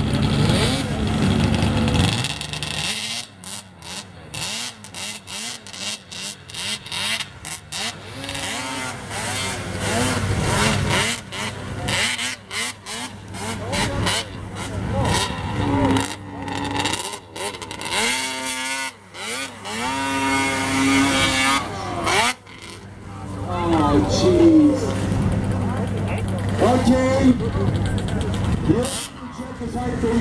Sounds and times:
Outside, rural or natural: 0.0 - 30.2
Vehicle: 0.0 - 30.2
Speech: 23.1 - 25.0, 25.6 - 30.2.

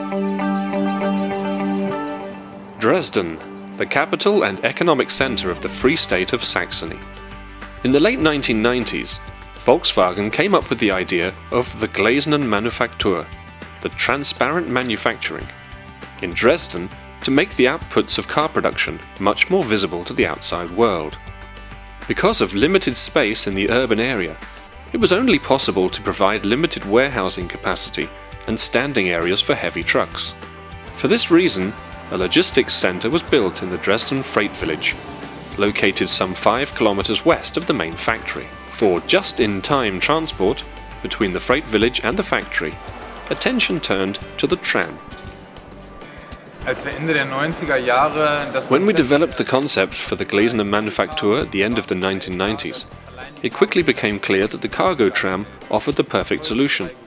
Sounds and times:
Music: 0.0 - 57.0
Speech: 2.8 - 7.0, 7.8 - 15.5, 16.2 - 21.2, 22.1 - 24.4, 25.0 - 30.4, 31.0 - 35.0, 35.6 - 45.0, 46.7 - 57.0
Vehicle: 30.8 - 49.7.

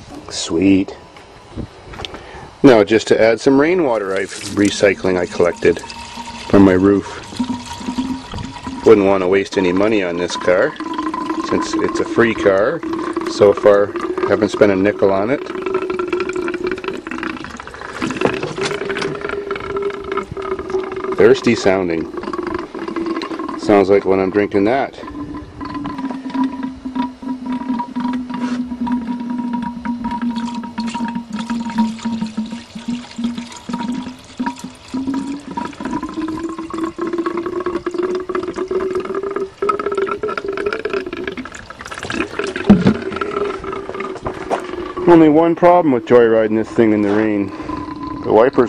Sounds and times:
Speech: 0.3 - 1.0, 2.6 - 5.8, 6.5 - 7.2, 8.8 - 10.8, 11.5 - 15.4, 21.2 - 22.1, 23.6 - 25.1, 45.1 - 47.5, 48.2 - 48.6
Liquid: 2.8 - 48.6.

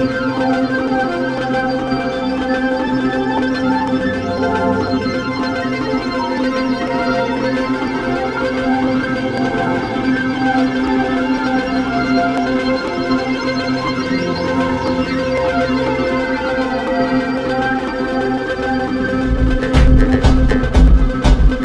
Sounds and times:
Music: 0.0 - 21.6.

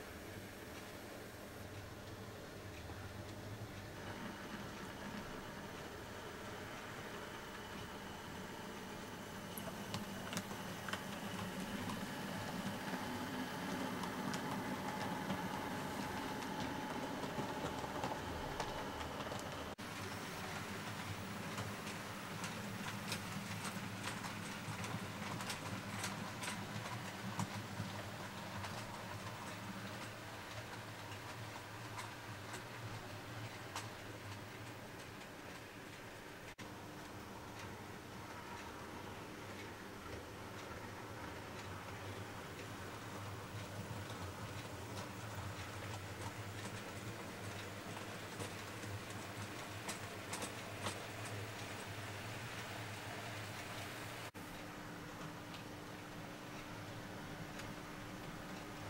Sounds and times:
Train: 0.0 - 54.3.

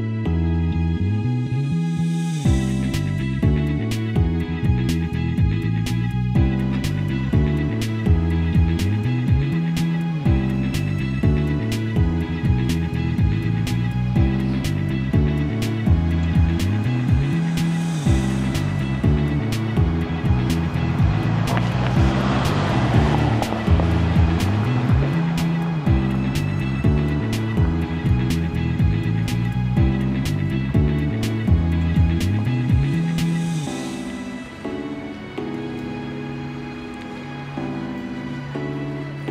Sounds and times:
Music: 0.0 - 39.3.

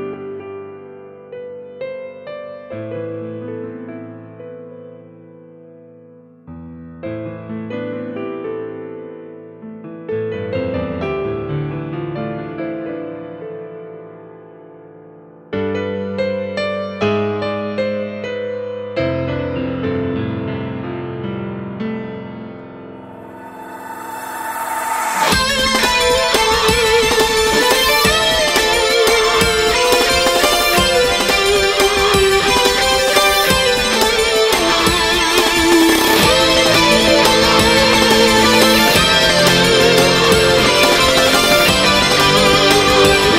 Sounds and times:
Music: 0.0 - 43.3
Sound effect: 23.0 - 26.3.

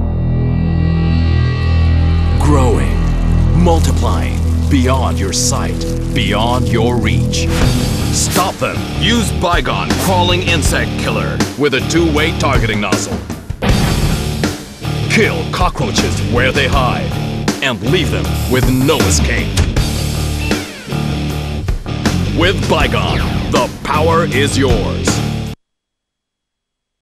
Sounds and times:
Music: 0.0 - 25.6
Speech: 2.3 - 7.5, 8.1 - 13.3, 15.1 - 19.6, 22.3 - 25.3.

